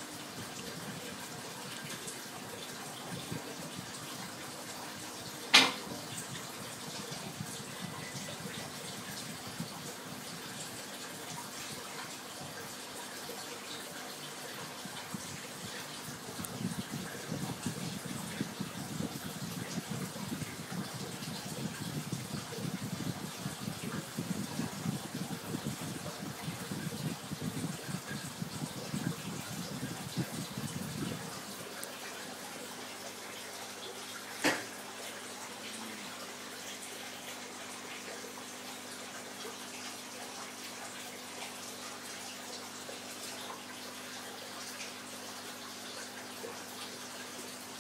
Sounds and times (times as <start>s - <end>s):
Gush: 0.0s - 47.8s.